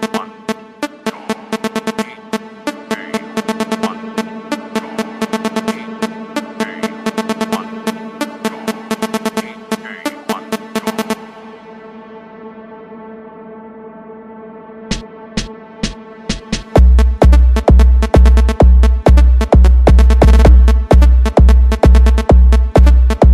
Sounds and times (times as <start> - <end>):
Music: 0.0 - 23.3.